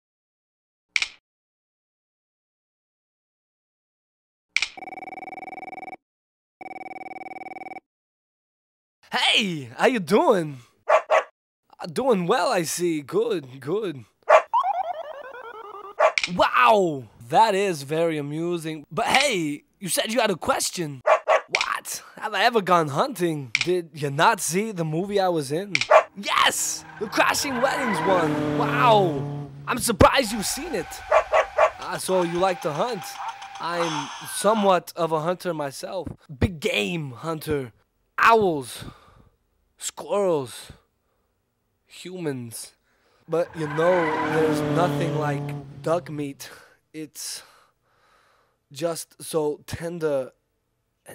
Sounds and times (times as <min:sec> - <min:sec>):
Speech: 0:09.1 - 0:10.6, 0:11.7 - 0:14.1, 0:16.3 - 0:21.0, 0:21.6 - 0:31.0, 0:31.8 - 0:38.9, 0:39.8 - 0:40.8, 0:41.9 - 0:44.2, 0:44.8 - 0:47.4, 0:48.8 - 0:50.4
Bow-wow: 0:10.9 - 0:11.3, 0:14.3 - 0:14.8, 0:16.0 - 0:16.2, 0:21.1 - 0:21.6, 0:25.8 - 0:26.1, 0:31.1 - 0:31.9.